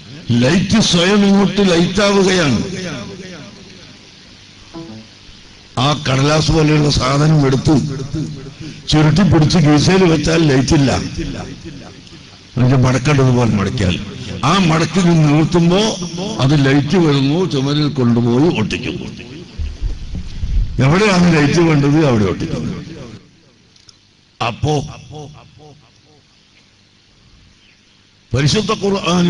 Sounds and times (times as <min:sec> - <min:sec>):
Male speech, man speaking: 0:00.1 - 0:03.1, 0:05.8 - 0:11.6, 0:12.6 - 0:19.2, 0:20.8 - 0:23.0, 0:24.4 - 0:25.0, 0:28.3 - 0:29.2.